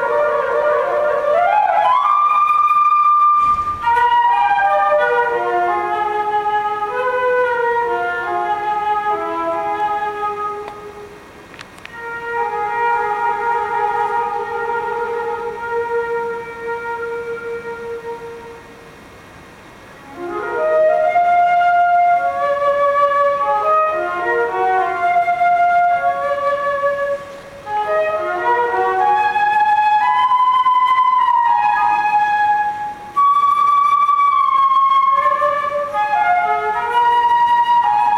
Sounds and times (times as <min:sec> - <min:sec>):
Flute: 0:00.0 - 0:38.1.